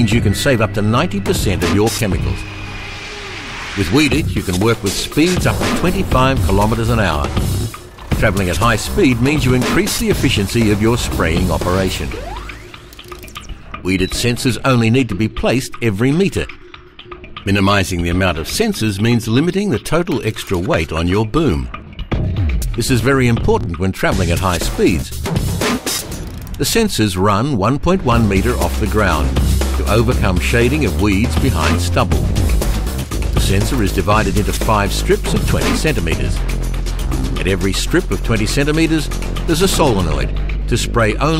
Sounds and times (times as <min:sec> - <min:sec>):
Speech: 0:00.0 - 0:02.4, 0:03.8 - 0:07.4, 0:08.2 - 0:12.2, 0:13.8 - 0:16.6, 0:17.4 - 0:21.7, 0:22.8 - 0:25.2, 0:26.6 - 0:32.2, 0:33.4 - 0:36.4, 0:37.3 - 0:41.3
Music: 0:00.0 - 0:41.3.